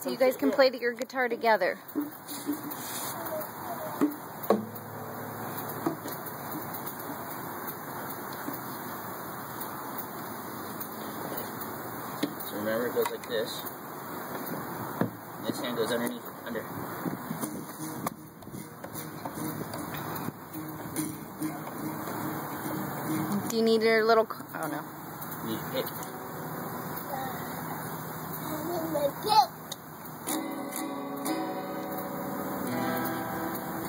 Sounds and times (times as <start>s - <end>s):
Acoustic guitar: 0.0s - 33.8s
Strum: 4.0s - 7.2s, 17.3s - 28.2s, 30.2s - 33.8s.